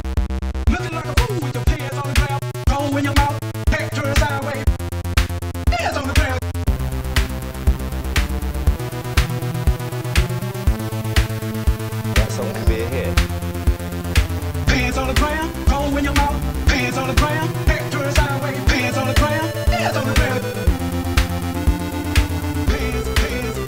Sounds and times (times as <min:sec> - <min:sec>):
Techno: 0:00.0 - 0:23.6.